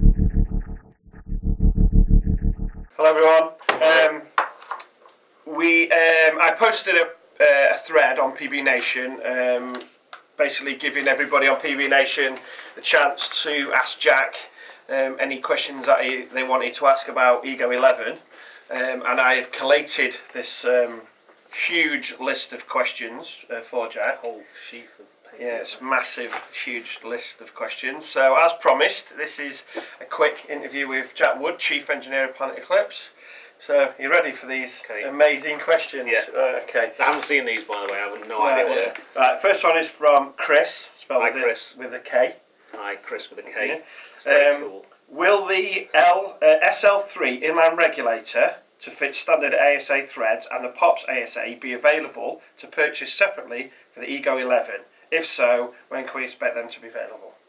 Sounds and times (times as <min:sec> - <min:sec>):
Speech: 0:03.0 - 0:04.3, 0:05.5 - 0:57.4.